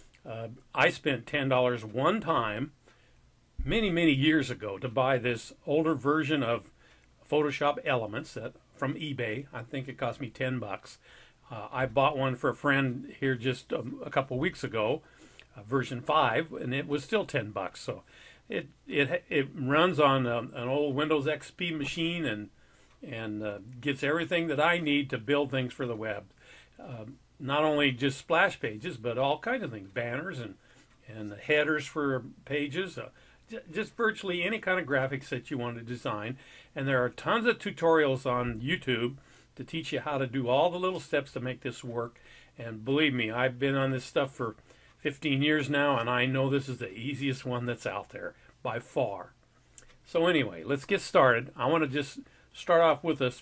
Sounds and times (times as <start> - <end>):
Speech: 0.2 - 2.8, 3.6 - 49.4, 50.1 - 53.4.